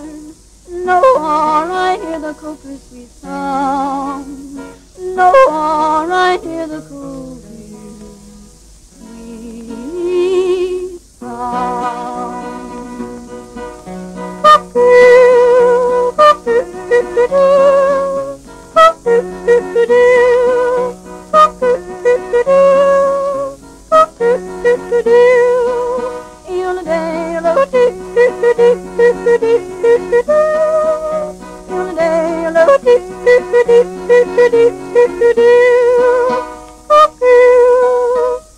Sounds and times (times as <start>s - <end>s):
Yodeling: 0.0s - 13.8s, 14.4s - 38.5s
Music: 0.0s - 38.5s.